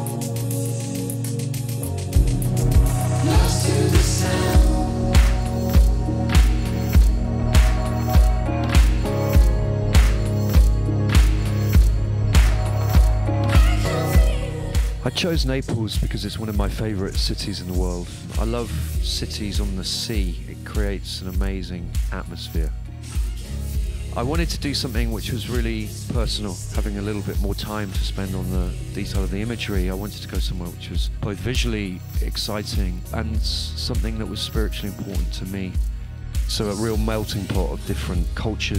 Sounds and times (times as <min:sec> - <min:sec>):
Music: 0:00.0 - 0:38.7
Speech: 0:15.0 - 0:22.8, 0:24.2 - 0:35.8, 0:36.5 - 0:38.7.